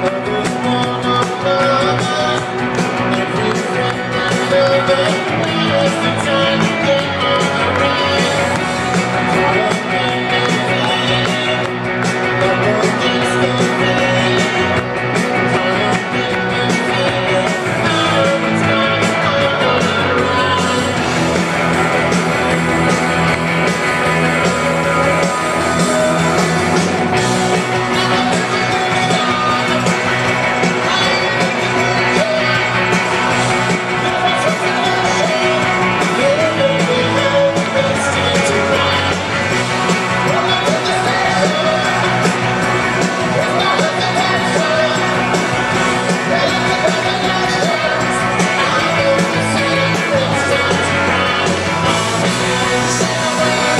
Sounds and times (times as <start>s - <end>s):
Music: 0.0s - 53.7s.